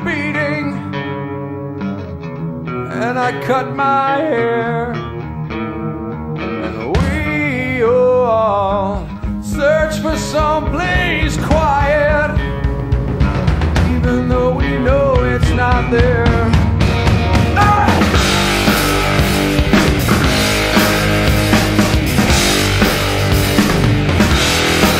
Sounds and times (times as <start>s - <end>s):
Music: 0.0s - 24.9s.